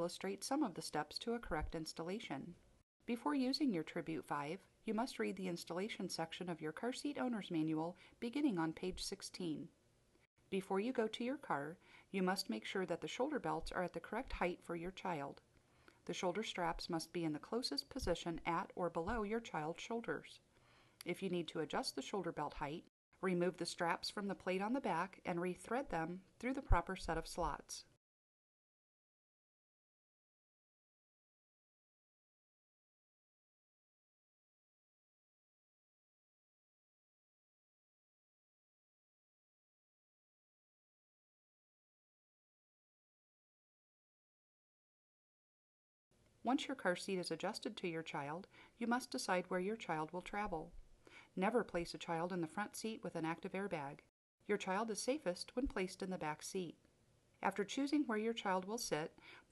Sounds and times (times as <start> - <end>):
Speech: 0.0 - 9.7, 10.5 - 15.4, 16.1 - 20.4, 21.0 - 28.0, 46.5 - 50.8, 51.4 - 56.8, 57.4 - 59.2.